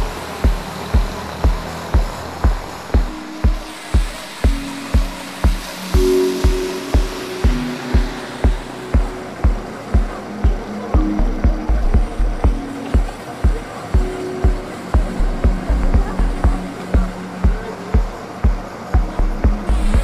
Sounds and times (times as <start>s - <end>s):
Music: 0.0s - 20.0s
Rain on surface: 0.0s - 20.0s
Speech: 8.7s - 20.0s.